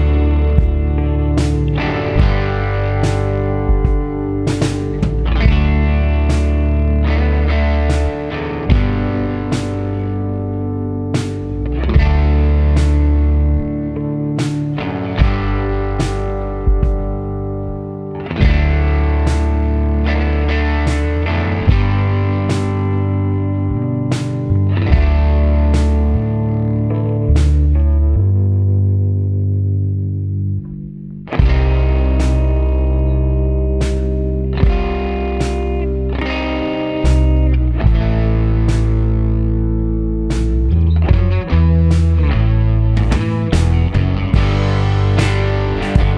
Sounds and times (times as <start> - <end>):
Music: 0.0 - 46.1.